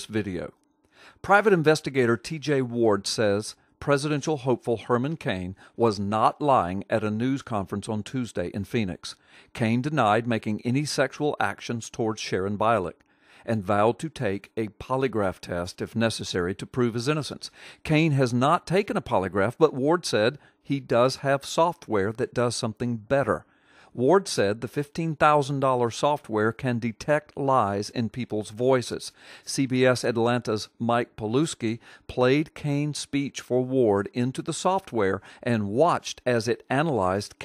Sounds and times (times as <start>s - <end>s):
Speech: 0.0s - 0.6s, 1.2s - 23.4s, 24.0s - 37.4s.